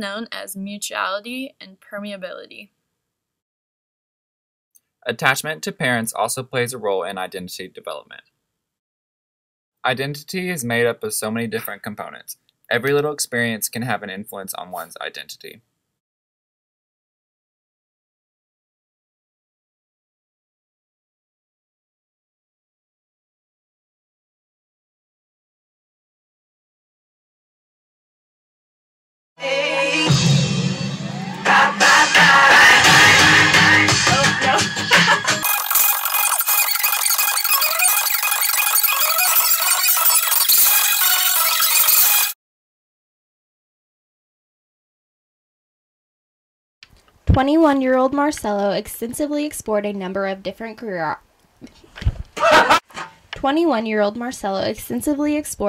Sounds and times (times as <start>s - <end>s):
Music: 29.4s - 35.5s.